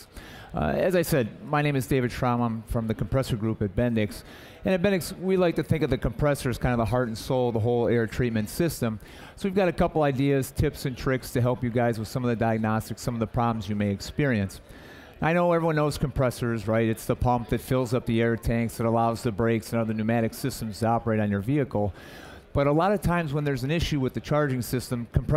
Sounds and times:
Speech: 0:00.0 - 0:25.3.

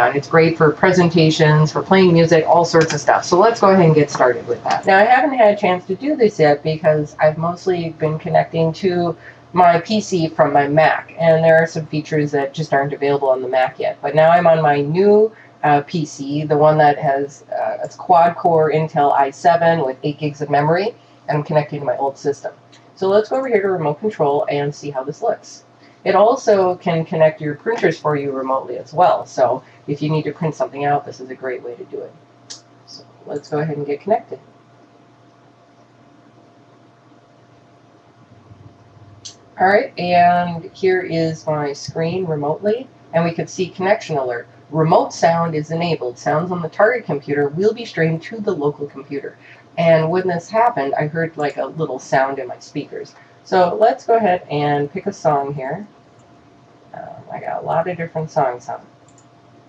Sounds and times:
Speech: 0:00.0 - 0:32.1, 0:32.9 - 0:34.4, 0:39.2 - 0:55.9, 0:56.9 - 0:58.8.

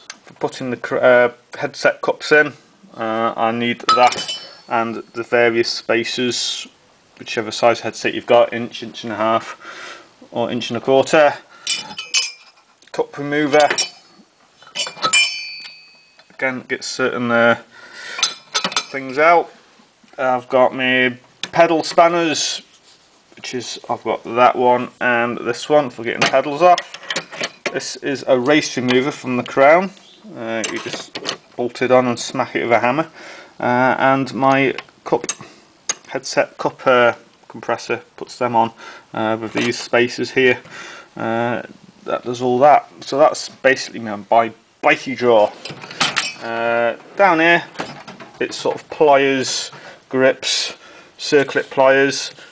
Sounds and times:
Speech: 0:00.4 - 0:09.6, 0:10.3 - 0:11.5, 0:12.9 - 0:13.9, 0:16.4 - 0:17.7, 0:18.9 - 0:19.5, 0:20.1 - 0:22.7, 0:23.4 - 0:26.9, 0:27.7 - 0:35.4, 0:36.1 - 0:45.6, 0:46.4 - 0:47.8, 0:48.4 - 0:52.4
Tools: 0:11.7 - 0:12.8, 0:13.6 - 0:16.4, 0:18.2 - 0:19.0, 0:26.2 - 0:27.8, 0:45.6 - 0:46.5.

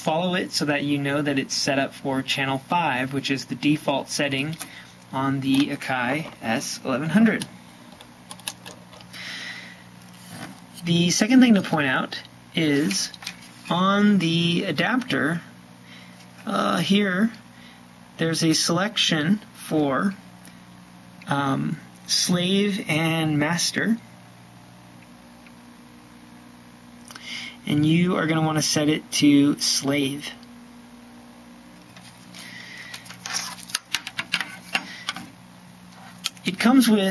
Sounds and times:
Speech: 0:00.0 - 0:07.5, 0:10.8 - 0:15.5, 0:16.4 - 0:17.4, 0:18.2 - 0:20.2, 0:21.2 - 0:24.1, 0:27.6 - 0:30.4, 0:36.4 - 0:37.1.

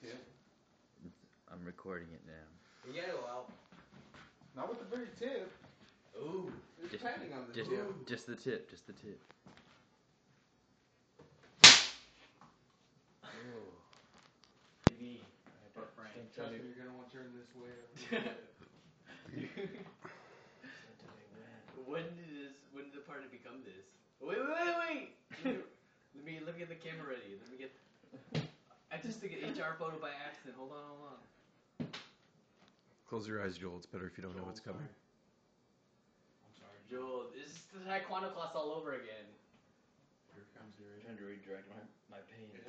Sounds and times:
Male speech, man speaking: 0:00.0 - 0:00.4, 0:01.0 - 0:03.6, 0:04.6 - 0:09.3, 0:13.3 - 0:13.9, 0:14.9 - 0:18.5, 0:20.7 - 0:25.2, 0:26.2 - 0:27.8, 0:28.9 - 0:31.3, 0:33.1 - 0:35.0, 0:36.5 - 0:39.4, 0:40.3 - 0:42.6.

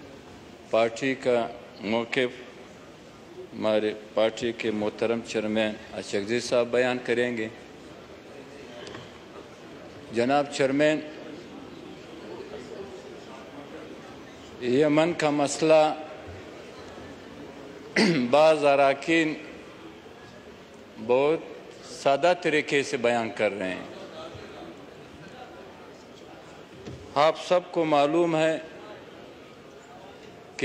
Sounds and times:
Male speech, man speaking: 0:00.7 - 0:02.5, 0:03.5 - 0:07.6, 0:10.1 - 0:11.2, 0:14.6 - 0:16.2, 0:18.0 - 0:19.6, 0:21.0 - 0:24.6, 0:27.1 - 0:29.0.

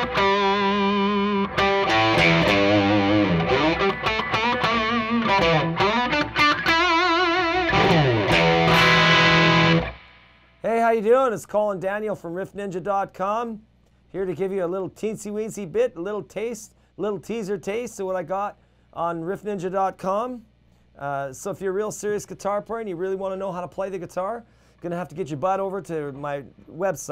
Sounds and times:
Electric guitar: 0:00.0 - 0:10.6
Strum: 0:00.0 - 0:10.6
Speech: 0:10.6 - 0:27.1.

